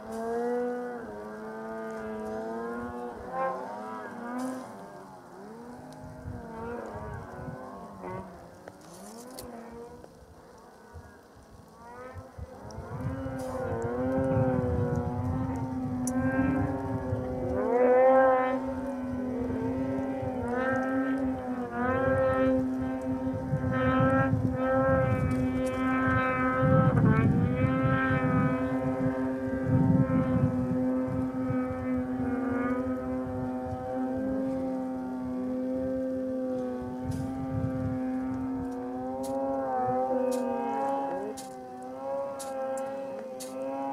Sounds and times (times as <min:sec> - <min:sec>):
Outside, rural or natural: 0:00.0 - 0:43.9
Vehicle: 0:00.0 - 0:43.9.